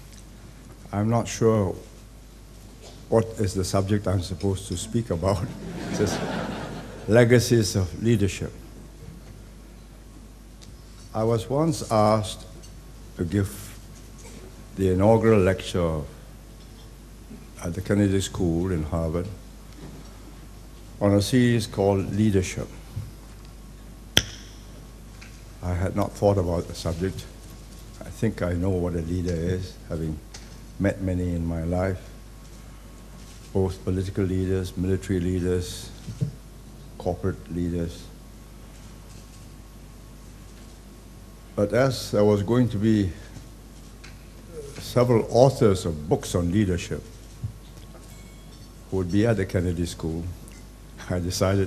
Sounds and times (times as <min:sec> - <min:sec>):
Narration, monologue: 0:00.0 - 0:51.6
Male speech, man speaking: 0:00.9 - 0:01.8, 0:03.1 - 0:06.2, 0:07.1 - 0:08.6, 0:11.2 - 0:12.5, 0:13.2 - 0:13.8, 0:14.8 - 0:16.2, 0:17.6 - 0:19.4, 0:21.0 - 0:22.7, 0:25.6 - 0:27.3, 0:28.0 - 0:30.2, 0:30.8 - 0:32.1, 0:33.6 - 0:36.0, 0:37.0 - 0:38.1, 0:41.6 - 0:43.3, 0:44.6 - 0:47.1, 0:48.9 - 0:50.4, 0:51.0 - 0:51.6.